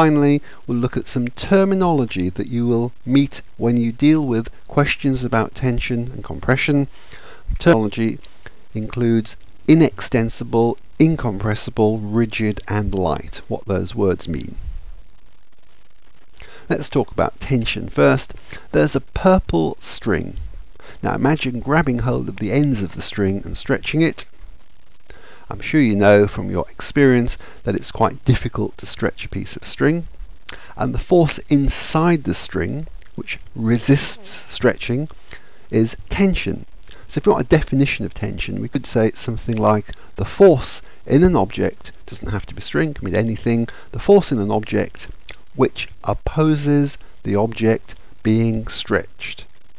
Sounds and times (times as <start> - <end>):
Narration, monologue: 0.0 - 49.7.